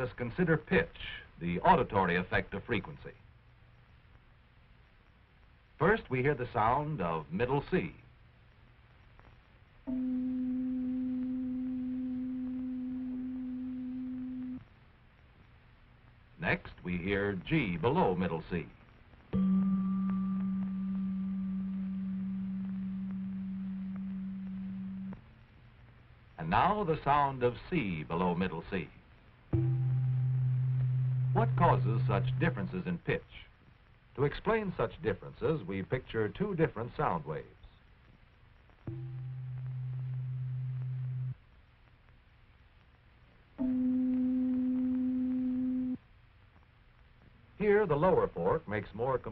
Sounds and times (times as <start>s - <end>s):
Speech: 0.0s - 3.2s, 5.8s - 8.1s, 16.4s - 18.8s, 26.4s - 29.0s, 31.4s - 33.6s, 34.2s - 37.8s, 47.6s - 49.3s.